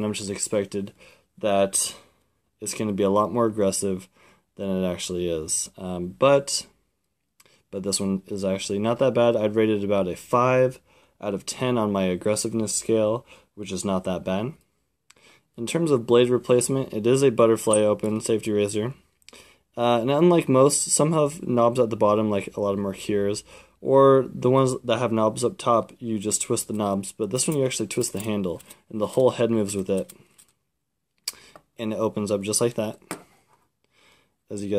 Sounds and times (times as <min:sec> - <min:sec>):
Speech: 0:00.0 - 0:06.8, 0:07.7 - 0:14.6, 0:15.6 - 0:19.0, 0:19.8 - 0:30.2, 0:31.8 - 0:33.1, 0:34.5 - 0:34.7.